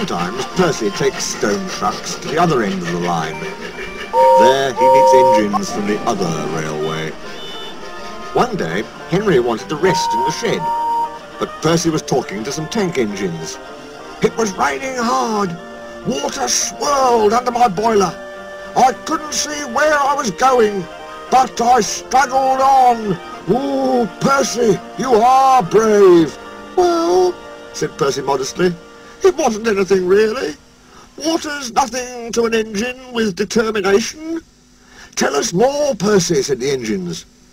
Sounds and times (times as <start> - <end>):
Narration, monologue: 0.0 - 10.7, 11.3 - 37.4
Music: 0.0 - 33.2.